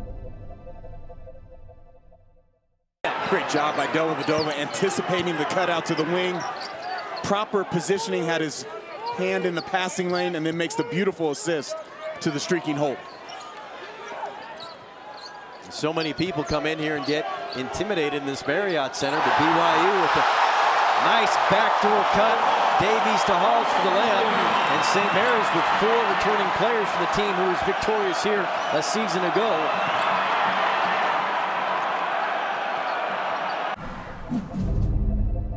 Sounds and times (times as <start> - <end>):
Speech: 3.2 - 6.5, 7.2 - 13.0, 15.7 - 20.3, 21.0 - 29.7.